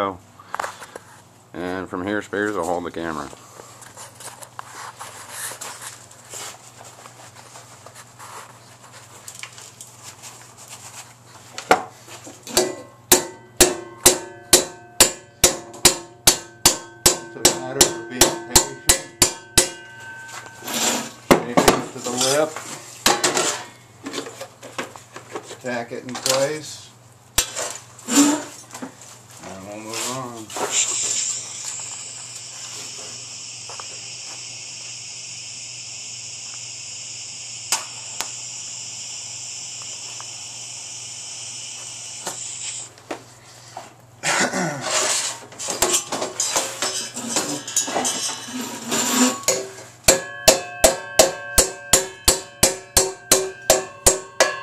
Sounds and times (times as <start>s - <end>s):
Speech: 1.5s - 3.4s, 17.3s - 18.9s, 21.4s - 22.6s, 25.6s - 27.0s, 29.4s - 31.2s.